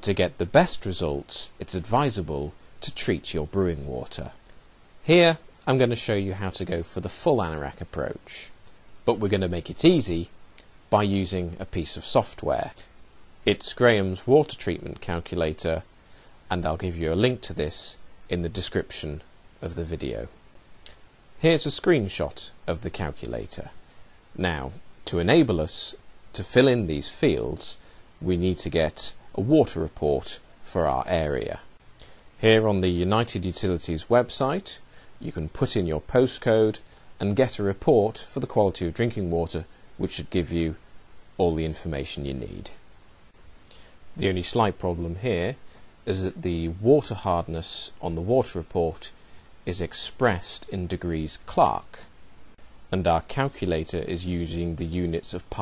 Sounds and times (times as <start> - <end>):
Speech: 0.0 - 4.4, 5.0 - 10.3, 10.9 - 12.9, 13.5 - 15.9, 16.5 - 20.4, 21.4 - 23.8, 24.4 - 31.7, 32.4 - 40.8, 41.4 - 42.8, 44.2 - 52.1, 52.9 - 55.6.